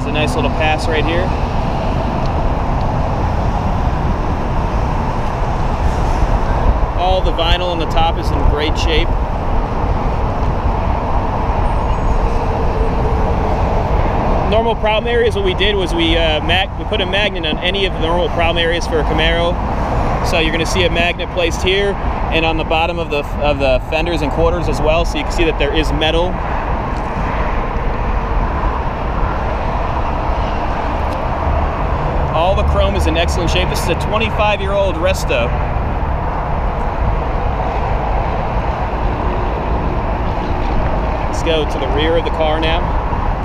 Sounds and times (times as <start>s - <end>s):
Speech: 0.0s - 1.3s, 7.0s - 9.2s, 14.5s - 19.6s, 20.2s - 26.4s, 32.3s - 35.6s, 41.3s - 42.9s
Car: 0.0s - 43.4s.